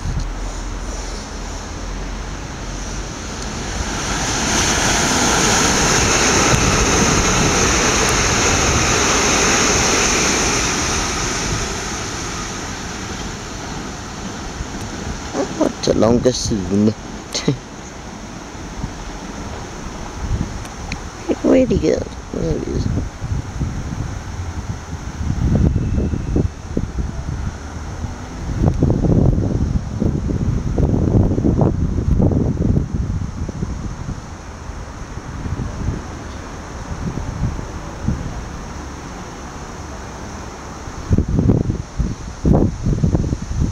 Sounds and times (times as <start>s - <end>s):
Subway, metro, underground: 0.0s - 43.7s
Train: 0.0s - 43.7s.